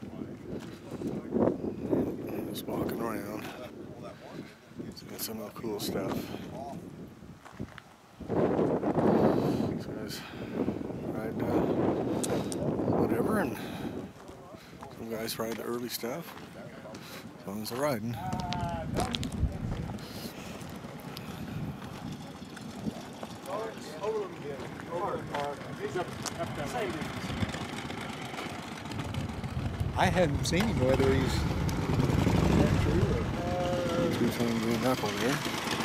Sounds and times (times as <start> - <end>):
Speech: 2.2 - 6.8, 14.2 - 19.9, 32.6 - 35.4.